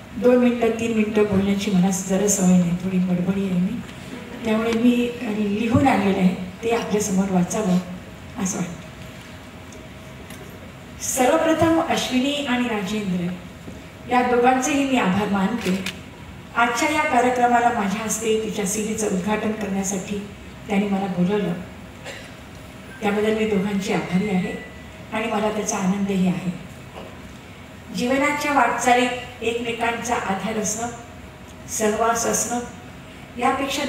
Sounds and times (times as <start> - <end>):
Narration, monologue: 0.0 - 33.8
Female speech, woman speaking: 0.2 - 3.8, 4.4 - 8.8, 11.0 - 13.4, 14.1 - 15.9, 16.6 - 21.7, 23.0 - 24.6, 25.2 - 26.7, 27.9 - 31.0, 31.7 - 32.8, 33.4 - 33.8.